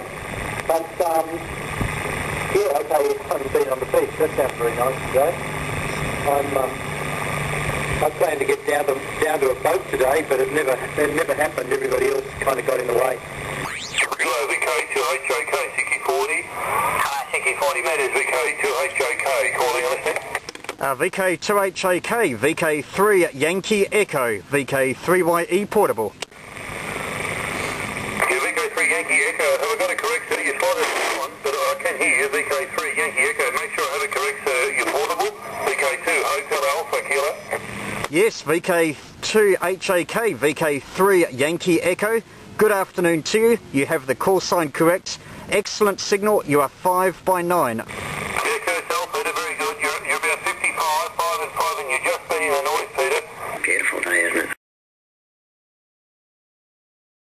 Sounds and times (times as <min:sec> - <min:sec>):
Radio: 0:00.0 - 0:01.6, 0:02.5 - 0:06.9, 0:07.9 - 0:26.1, 0:27.2 - 0:43.6, 0:44.2 - 0:54.6
Speech: 0:00.7 - 0:01.5, 0:02.5 - 0:05.4, 0:06.2 - 0:06.8, 0:08.0 - 0:13.2, 0:14.1 - 0:26.2, 0:28.2 - 0:54.6.